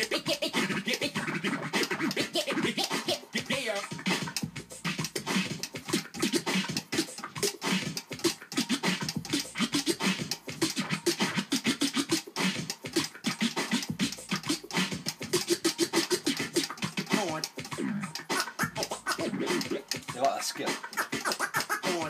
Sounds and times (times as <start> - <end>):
Scratching (performance technique): 0.0 - 22.1.